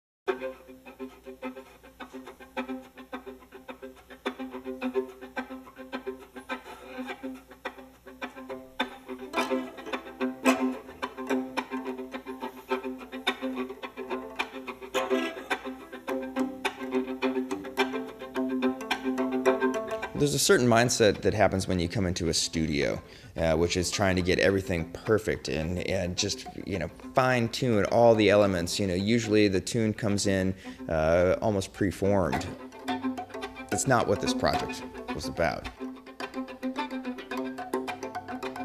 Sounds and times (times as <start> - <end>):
Music: 0.3 - 38.6
Speech: 20.2 - 32.6, 33.7 - 35.8.